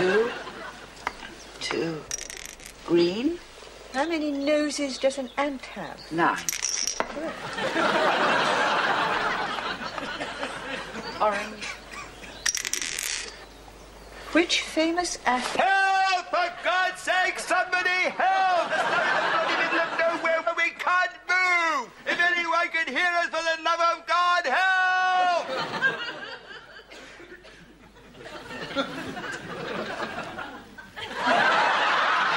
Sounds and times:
Outside, rural or natural: 0:00.0 - 0:22.7.

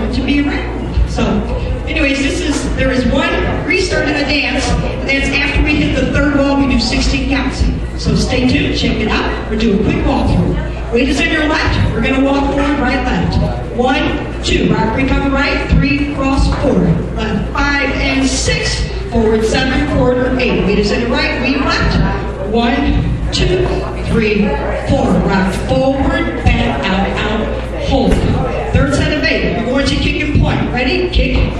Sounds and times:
Speech: 0:00.0 - 0:31.5.

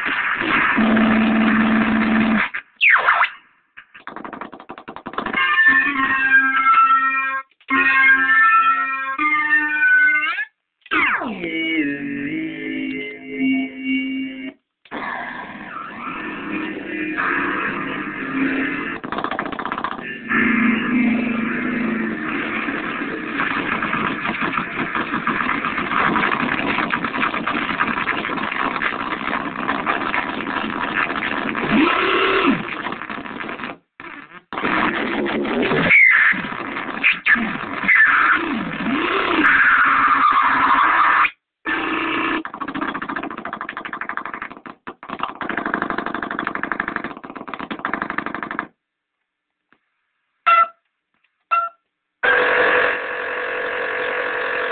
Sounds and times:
Synthesizer: 0:05.2 - 0:33.6.

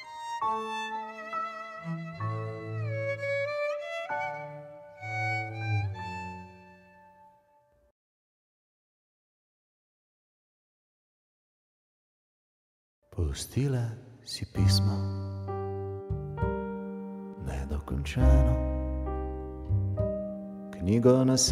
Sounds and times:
Music: 0:00.0 - 0:07.9, 0:14.2 - 0:21.5
Speech: 0:13.1 - 0:15.2, 0:17.4 - 0:18.6, 0:20.8 - 0:21.5.

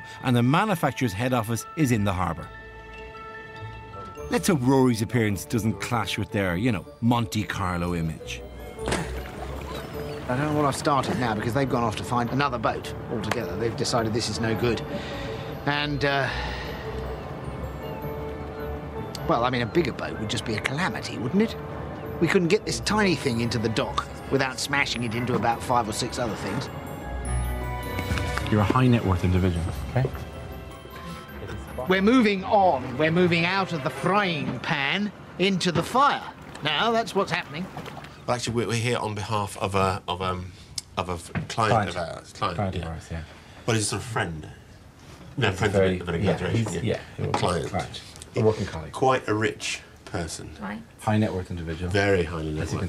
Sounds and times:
Music: 0:00.0 - 0:37.5, 0:45.4 - 0:49.8, 0:50.6 - 0:52.8.

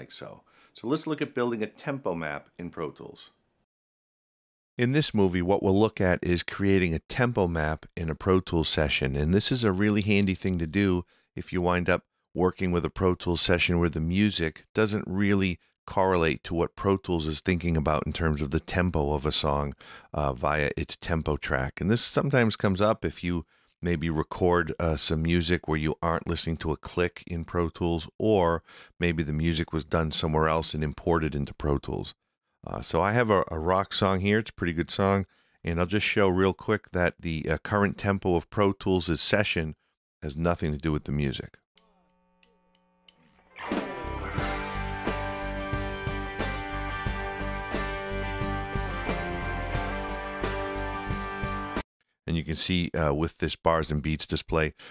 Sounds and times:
Speech: 0:00.0 - 0:03.3, 0:04.8 - 0:41.6, 0:52.3 - 0:54.8.

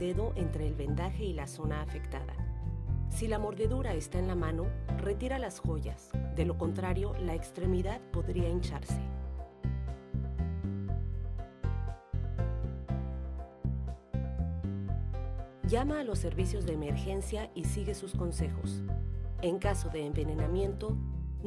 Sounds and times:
Speech: 0:00.0 - 0:02.4, 0:03.1 - 0:09.1, 0:15.7 - 0:18.8, 0:19.4 - 0:21.4
Music: 0:00.0 - 0:21.4.

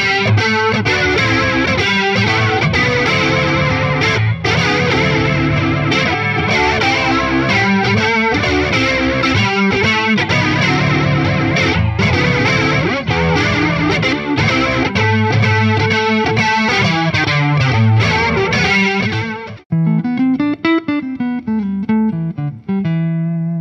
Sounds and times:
Electric guitar: 0:00.0 - 0:23.6.

